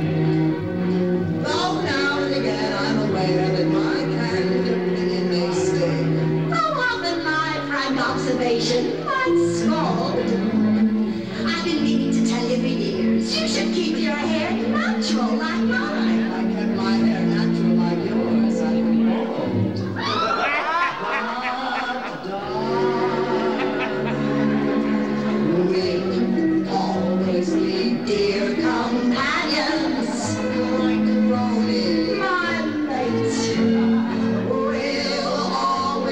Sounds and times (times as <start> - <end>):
Inside, large room or hall: 0.0 - 36.1
Music: 0.0 - 36.1
Singing: 11.4 - 36.1.